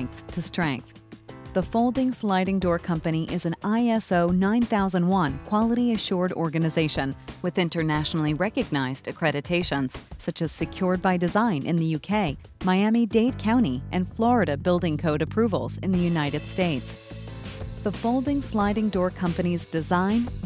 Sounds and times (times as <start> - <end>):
Speech: 0.0 - 0.9, 1.6 - 17.0, 17.9 - 20.4
Music: 0.0 - 20.4.